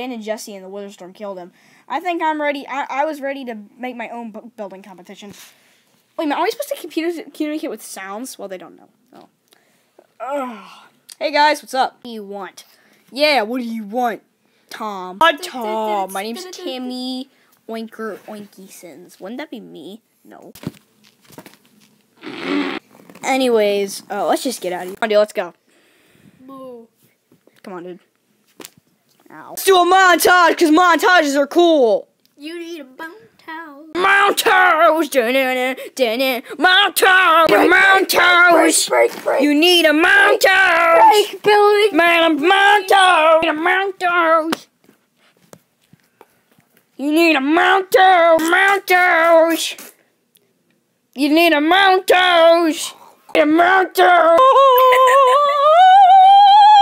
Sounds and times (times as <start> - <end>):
Speech: 6.2 - 9.3, 11.2 - 20.6, 29.2 - 44.7.